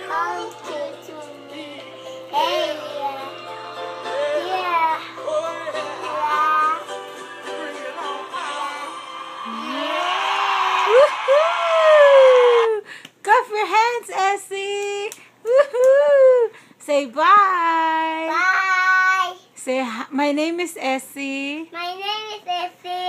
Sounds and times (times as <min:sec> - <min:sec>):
Inside, small room: 0:00.0 - 0:23.0
Child speech, kid speaking: 0:04.4 - 0:05.1, 0:18.2 - 0:19.5, 0:21.6 - 0:23.0.